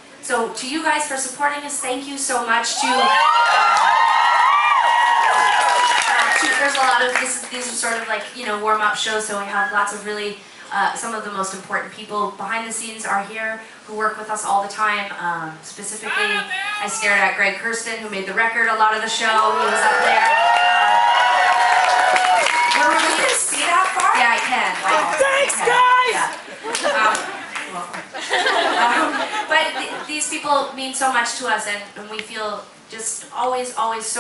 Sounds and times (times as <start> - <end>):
Speech: 0.2 - 3.2, 6.5 - 19.9, 28.8 - 34.2.